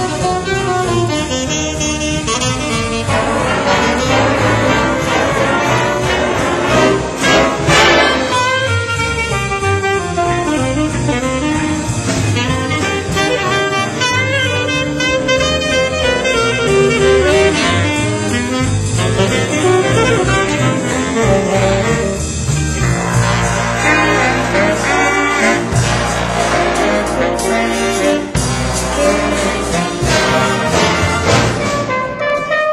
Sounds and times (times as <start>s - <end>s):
Brass instrument: 0.0s - 32.7s
Orchestra: 0.0s - 32.7s
Percussion: 0.0s - 32.7s
Saxophone: 0.0s - 32.7s.